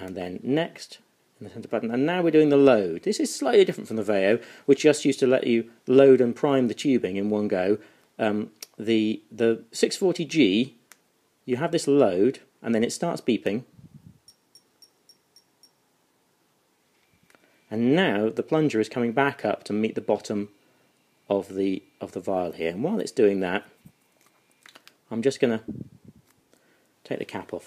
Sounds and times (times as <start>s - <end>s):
Speech: 0.0s - 10.8s, 11.5s - 13.7s, 17.7s - 20.5s, 21.3s - 23.7s, 25.1s - 25.7s, 27.0s - 27.6s.